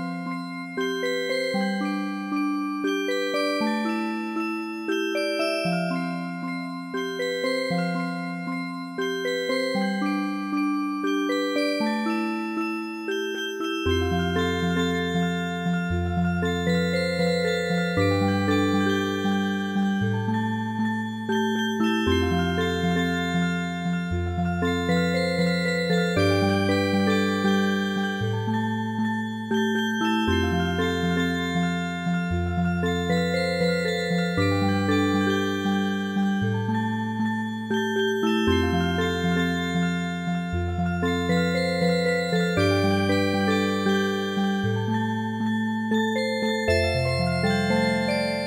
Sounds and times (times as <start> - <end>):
Music: 0.0 - 48.4.